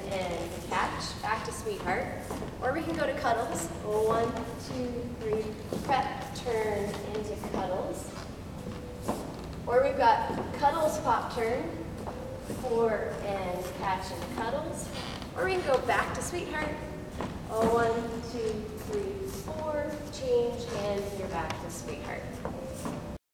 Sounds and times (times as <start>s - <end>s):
Speech: 0.0s - 8.2s, 9.7s - 11.8s, 12.6s - 16.9s, 17.5s - 22.4s.